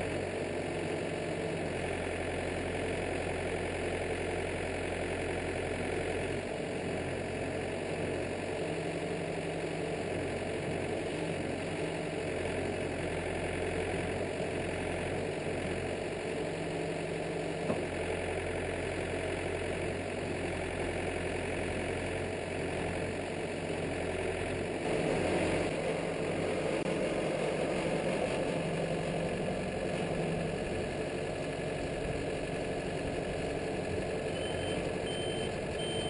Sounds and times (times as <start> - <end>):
Vehicle: 0.0 - 36.1.